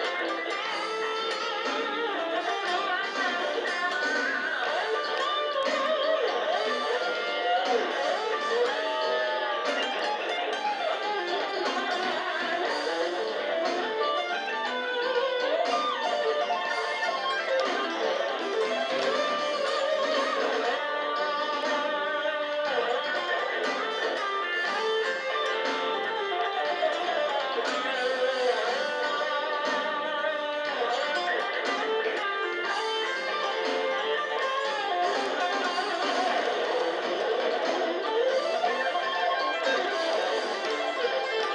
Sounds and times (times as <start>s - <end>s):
Electric guitar: 0.0s - 41.5s.